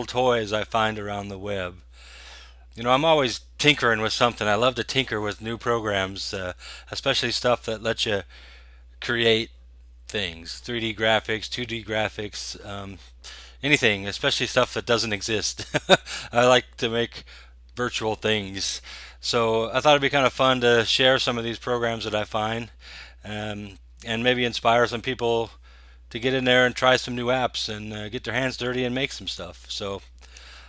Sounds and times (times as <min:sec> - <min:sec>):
Speech: 0:00.0 - 0:01.8, 0:02.8 - 0:08.3, 0:09.0 - 0:09.5, 0:10.1 - 0:30.1.